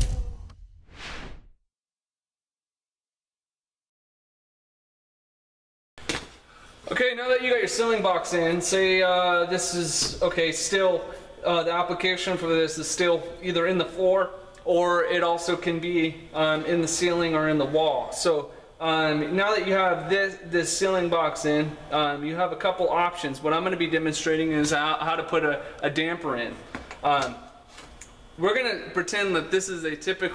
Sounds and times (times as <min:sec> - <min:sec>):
Speech: 0:06.9 - 0:27.5, 0:28.4 - 0:30.3.